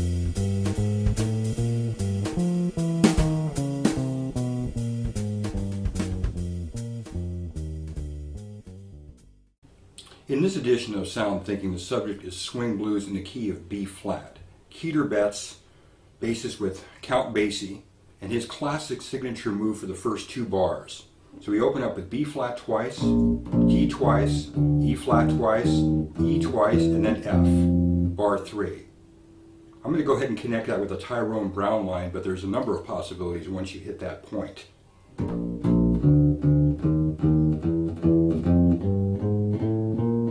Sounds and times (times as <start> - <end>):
Blues: 0.0 - 9.3, 23.0 - 28.4, 35.2 - 40.3
Speech: 10.0 - 28.9, 29.8 - 34.8.